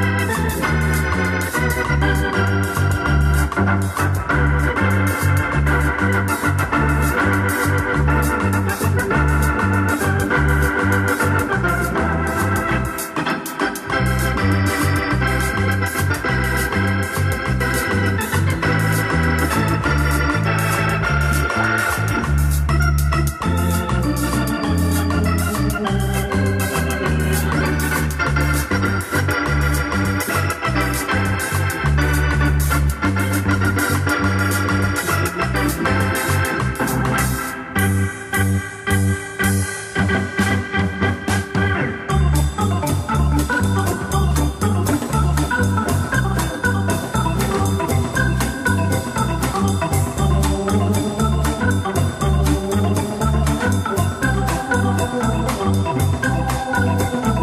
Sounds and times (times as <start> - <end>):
Electronic organ: 0.0 - 57.4.